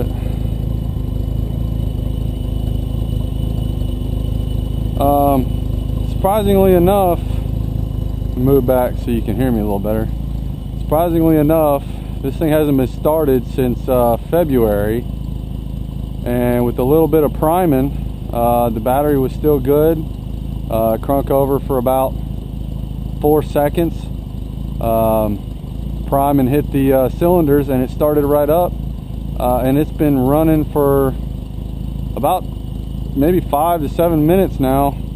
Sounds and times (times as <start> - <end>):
Speech: 0.0 - 0.2, 5.0 - 5.5, 6.1 - 7.2, 8.4 - 10.1, 10.9 - 15.0, 16.2 - 20.1, 20.7 - 22.1, 23.2 - 24.1, 24.8 - 25.4, 26.1 - 28.7, 29.4 - 31.2, 32.2 - 32.4, 33.2 - 35.0.